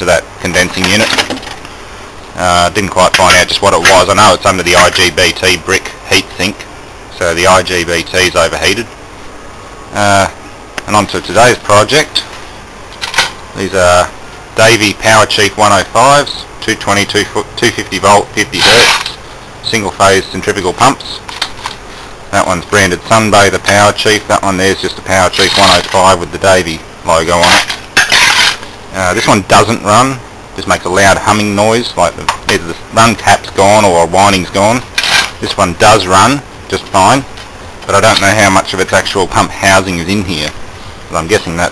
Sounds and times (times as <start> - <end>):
Speech: 0.0 - 1.2, 2.4 - 8.9, 9.9 - 12.3, 13.6 - 21.3, 22.3 - 27.6, 28.9 - 41.7.